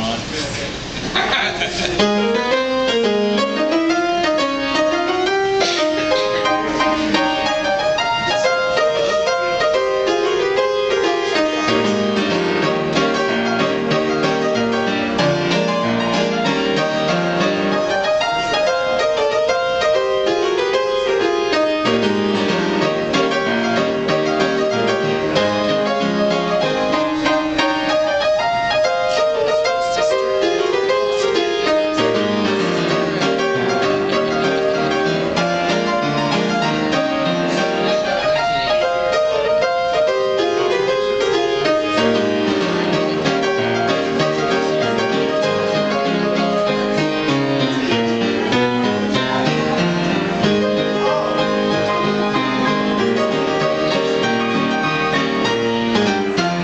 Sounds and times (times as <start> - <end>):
Music: 1.9 - 56.6.